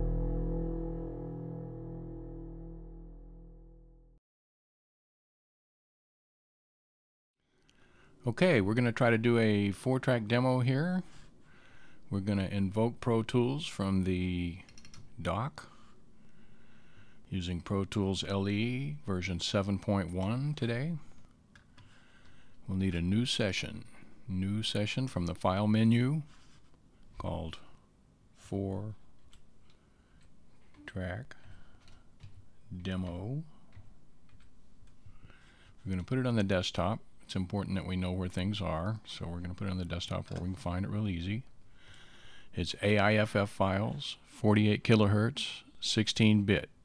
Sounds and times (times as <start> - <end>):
Speech: 8.2 - 11.1, 12.1 - 15.7, 17.3 - 21.1, 22.6 - 26.3, 27.2 - 27.8, 28.4 - 29.0, 30.8 - 31.4, 32.7 - 33.6, 35.8 - 41.5, 42.6 - 46.8.